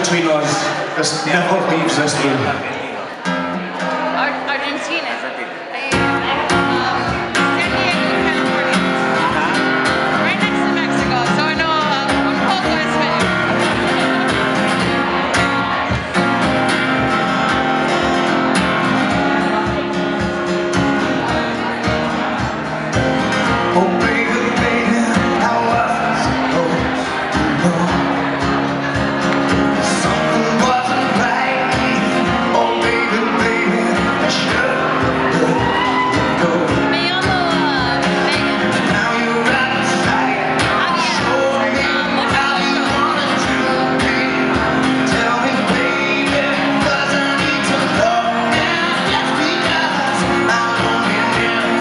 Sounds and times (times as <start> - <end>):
Music: 3.2 - 4.6, 5.8 - 51.8
Screaming: 35.6 - 36.3.